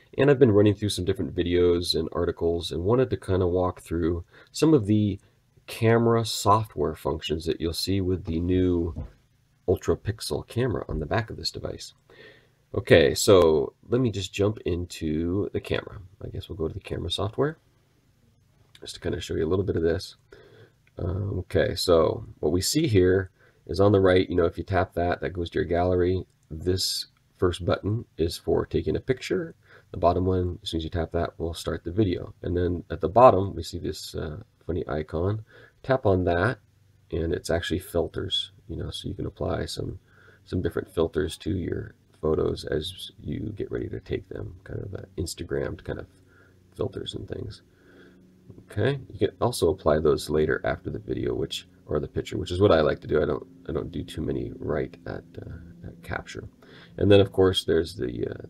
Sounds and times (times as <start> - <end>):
Speech: 0.0 - 12.0, 12.7 - 17.6, 18.8 - 20.2, 20.9 - 47.7, 48.5 - 58.5.